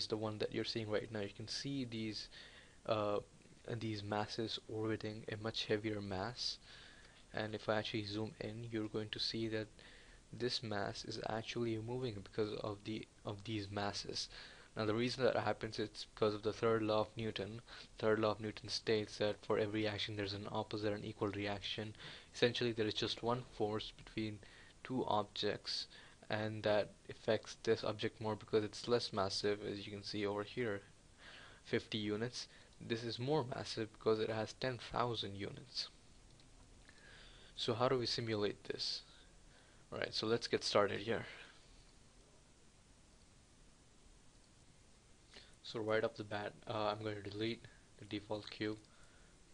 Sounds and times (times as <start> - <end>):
Speech: 0.0 - 6.6, 7.3 - 9.7, 10.3 - 30.9, 31.6 - 36.0, 37.6 - 39.1, 39.9 - 41.5, 45.6 - 48.9.